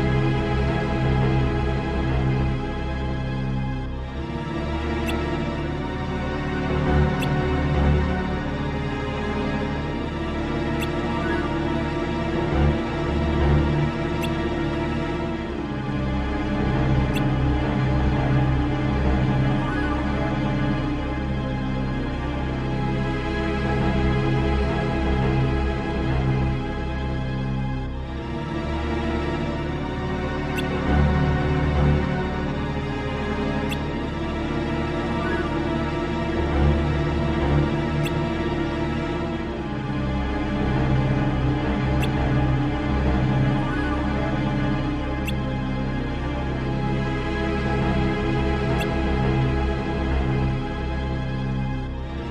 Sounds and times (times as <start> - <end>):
Music: 0.0 - 52.3.